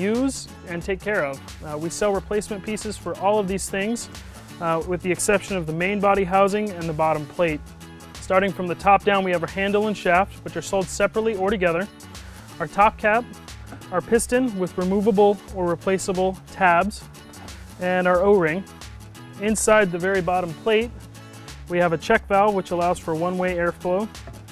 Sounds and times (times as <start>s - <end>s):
Speech: 0.0s - 7.6s, 8.2s - 11.9s, 12.6s - 13.3s, 13.9s - 17.0s, 17.8s - 18.7s, 19.4s - 20.9s, 21.7s - 24.1s
Music: 0.0s - 24.5s.